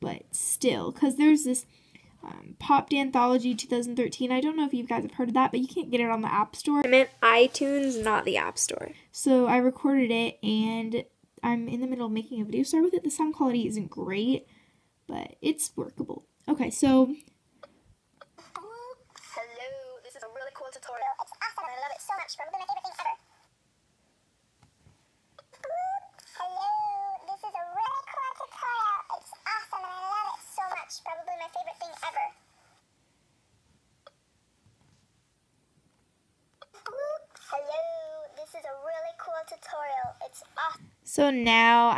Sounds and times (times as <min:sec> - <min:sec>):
Inside, small room: 0:00.0 - 0:41.9.